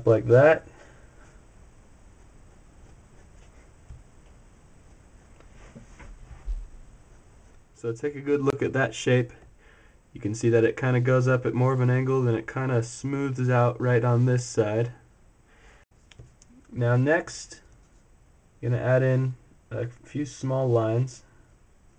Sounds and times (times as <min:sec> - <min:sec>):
Speech: 0:00.0 - 0:00.7, 0:07.8 - 0:09.4, 0:10.2 - 0:15.0, 0:16.7 - 0:17.7, 0:18.6 - 0:21.3
Inside, small room: 0:00.0 - 0:21.9.